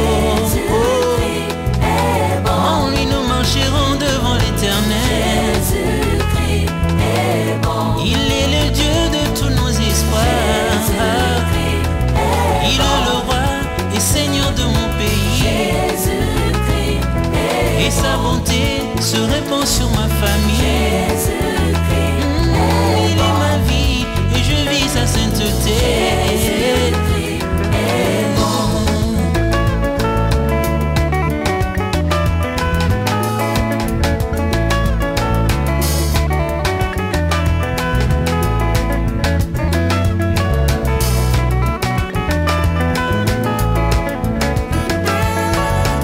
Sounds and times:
Salsa music: 0.0s - 46.0s.

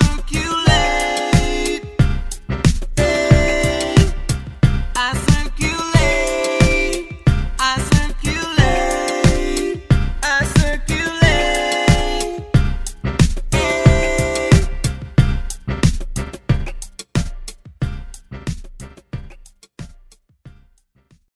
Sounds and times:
Jazz: 0.0s - 19.6s.

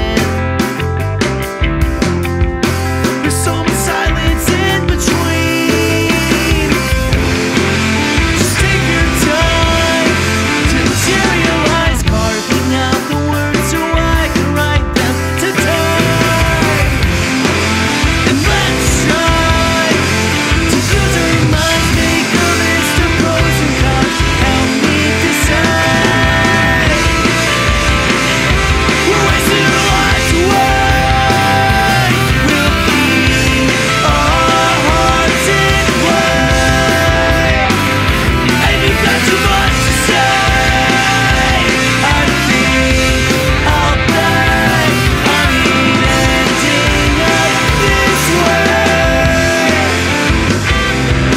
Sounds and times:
Soundtrack music: 0.0s - 51.3s.

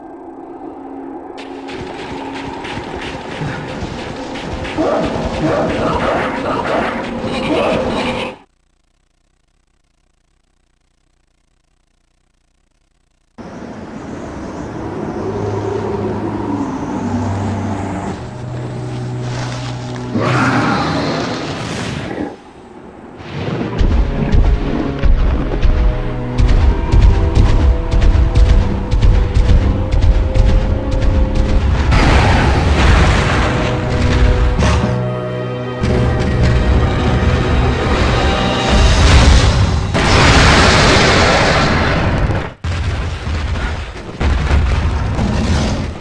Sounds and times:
Music: 18.2s - 20.7s, 23.8s - 39.9s.

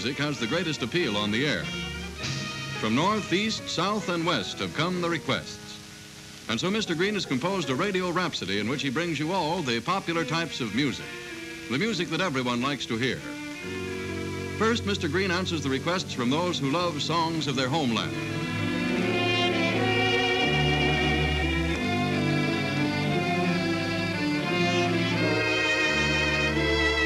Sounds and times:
Speech: 0.0s - 1.7s, 2.8s - 5.8s, 6.5s - 11.0s, 11.7s - 13.3s, 14.6s - 18.2s
Music: 0.0s - 27.0s.

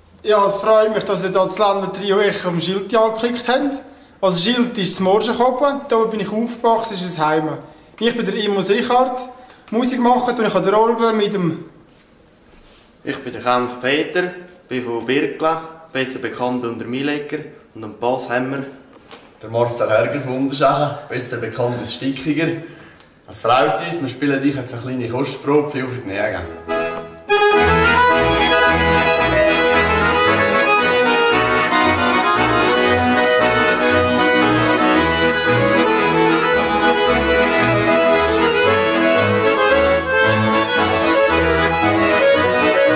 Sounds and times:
Speech: 0.2s - 11.7s, 13.0s - 18.8s, 19.4s - 22.7s, 23.3s - 26.6s.

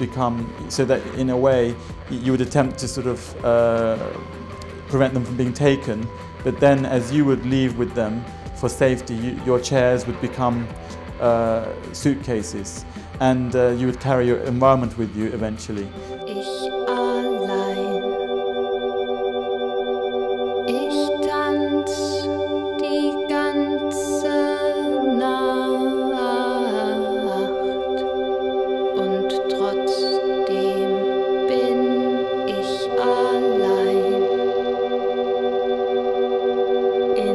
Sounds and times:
Music: 0.0s - 37.3s.

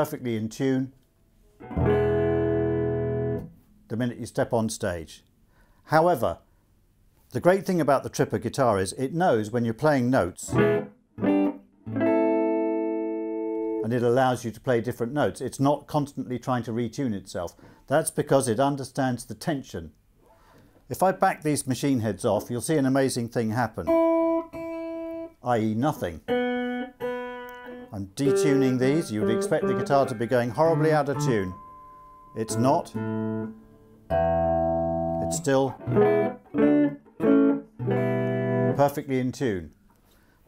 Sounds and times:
Speech: 0.0s - 1.0s, 3.9s - 5.3s, 5.9s - 6.5s, 7.3s - 10.6s, 13.8s - 20.0s, 20.9s - 24.0s, 25.4s - 26.3s, 27.9s - 31.6s, 32.4s - 33.0s, 35.2s - 35.8s, 38.8s - 39.8s.

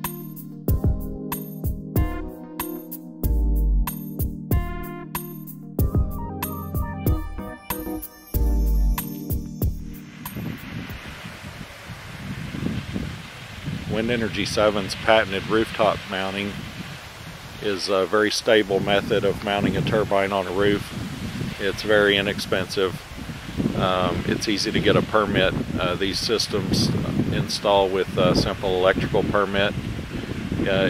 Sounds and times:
Rustling leaves: 9.7s - 30.8s
Speech: 13.9s - 16.6s, 17.6s - 20.9s, 21.6s - 23.0s, 23.8s - 29.8s, 30.6s - 30.8s.

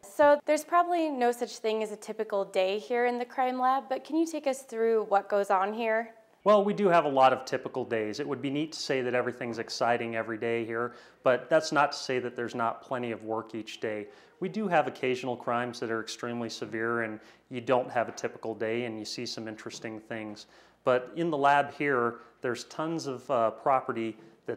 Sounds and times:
Speech: 0.0s - 24.5s.

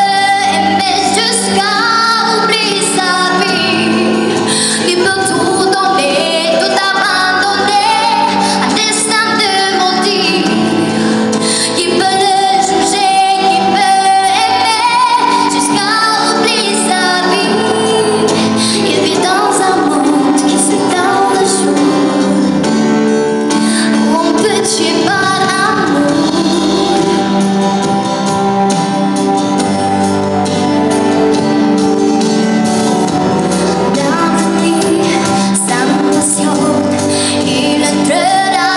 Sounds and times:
Female singing: 0.0s - 11.0s, 11.6s - 22.5s, 23.8s - 27.4s, 33.9s - 38.7s
Music: 0.0s - 38.7s.

